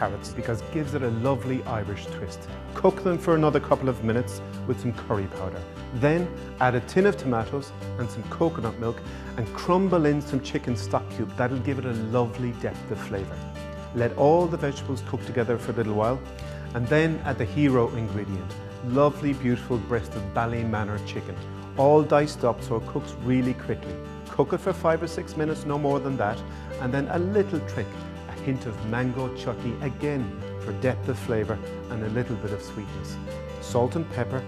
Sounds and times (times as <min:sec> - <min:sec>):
Speech: 0:00.0 - 0:13.4, 0:14.0 - 0:34.4
Music: 0:00.0 - 0:34.4.